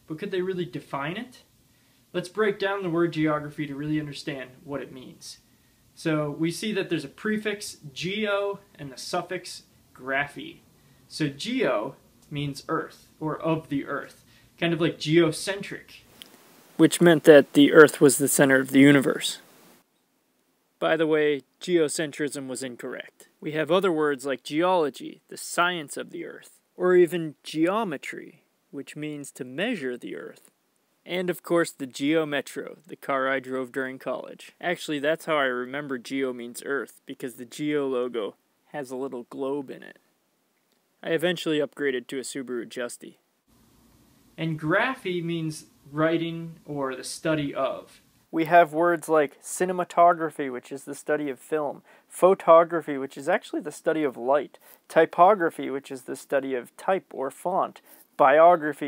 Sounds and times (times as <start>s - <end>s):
Speech: 0.1s - 1.5s, 2.1s - 5.4s, 6.0s - 16.1s, 16.8s - 19.4s, 20.8s - 40.0s, 41.0s - 43.2s, 44.4s - 58.8s.